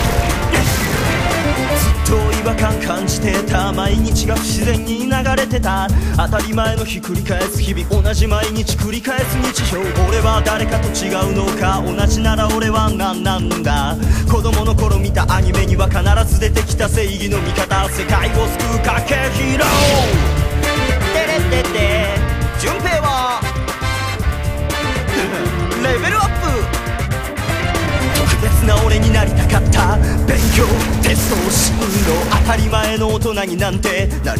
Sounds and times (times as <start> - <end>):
Music: 0.0 - 34.3
Male singing: 1.8 - 23.5, 24.8 - 26.6, 27.5 - 34.3.